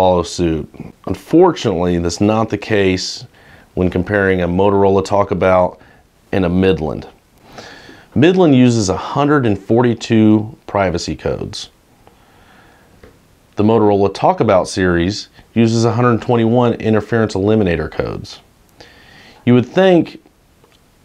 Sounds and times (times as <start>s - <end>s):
Speech: 0.0s - 7.2s, 8.2s - 11.8s, 13.6s - 18.5s, 19.4s - 20.3s.